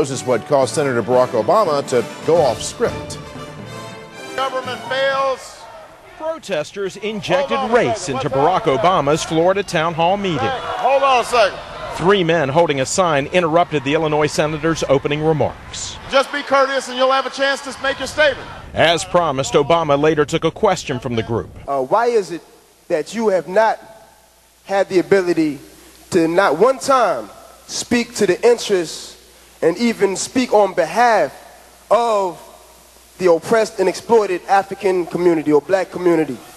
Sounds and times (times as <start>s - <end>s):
Male speech, man speaking: 0.0s - 3.2s, 4.4s - 23.8s, 24.7s - 32.5s, 33.2s - 36.5s
Narration, monologue: 0.0s - 36.5s.